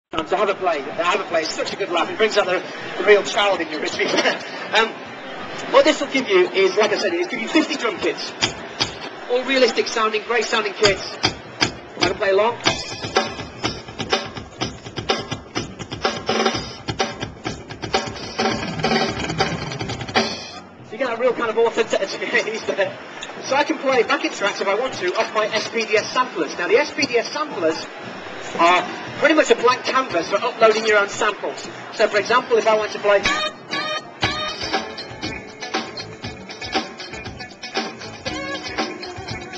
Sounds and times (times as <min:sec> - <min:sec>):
Speech: 0:00.1 - 0:05.0, 0:05.6 - 0:08.3, 0:09.2 - 0:11.2, 0:12.0 - 0:12.6, 0:20.9 - 0:33.3
Inside, large room or hall: 0:00.1 - 0:39.5.